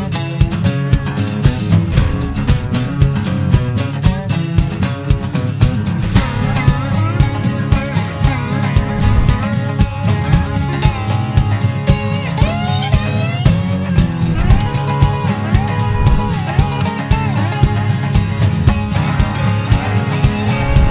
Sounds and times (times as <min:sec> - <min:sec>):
Music: 0:00.0 - 0:20.9.